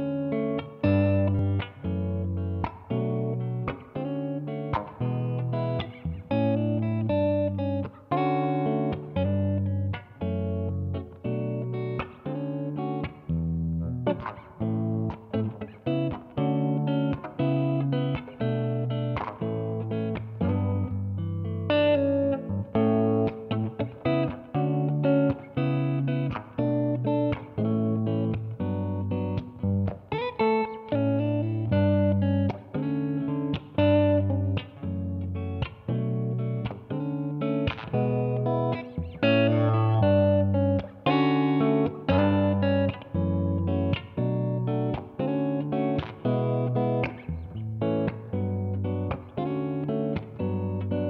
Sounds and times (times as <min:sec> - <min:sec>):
Strum: 0:31.4 - 0:51.0.